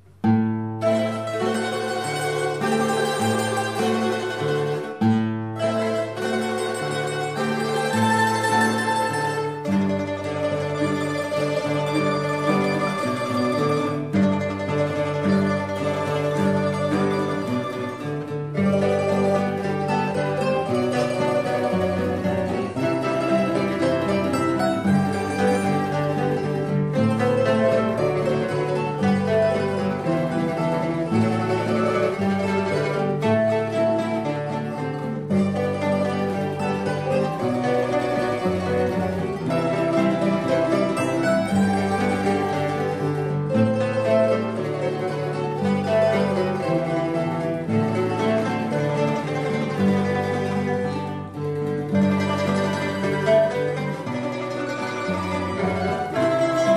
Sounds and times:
Mandolin: 0:00.0 - 0:56.7.

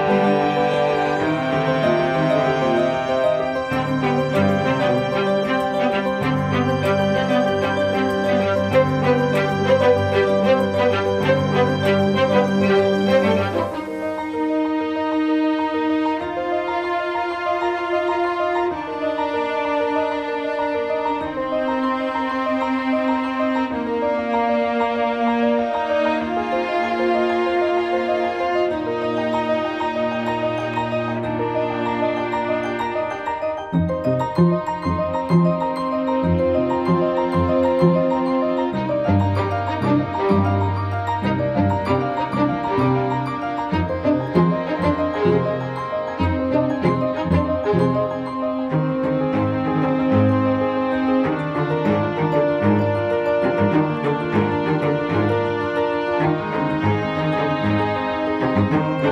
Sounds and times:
Piano: 0:00.0 - 0:59.1.

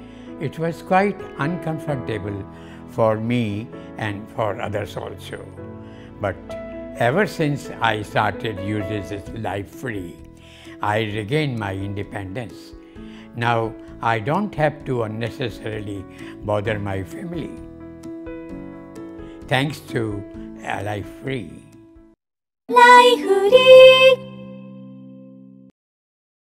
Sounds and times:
Music: 0:00.0 - 0:25.7
Speech: 0:00.4 - 0:02.4, 0:03.0 - 0:05.5, 0:07.0 - 0:10.2, 0:10.8 - 0:12.7, 0:13.4 - 0:17.6, 0:19.5 - 0:21.7.

